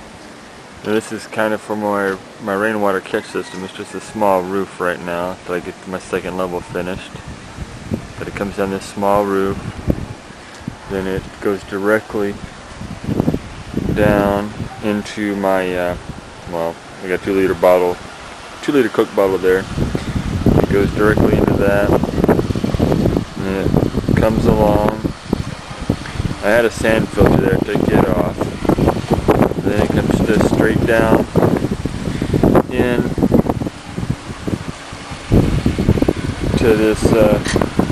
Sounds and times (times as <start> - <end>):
Rain on surface: 0.0 - 1.0, 6.6 - 24.2, 24.8 - 37.9
Speech: 0.8 - 7.2, 8.2 - 9.6, 10.9 - 12.4, 13.9 - 18.0, 18.6 - 19.7, 20.6 - 22.0, 23.4 - 25.1, 26.4 - 28.4, 29.6 - 31.3, 32.7 - 33.2, 36.6 - 37.6.